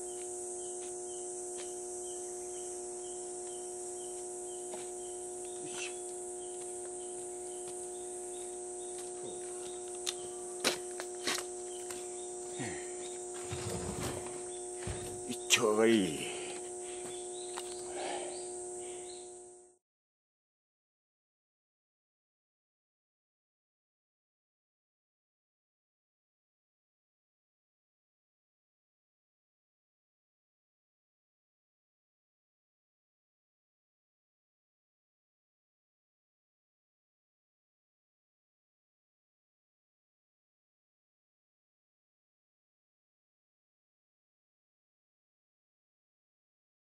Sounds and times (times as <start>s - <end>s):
Speech: 15.3s - 16.6s.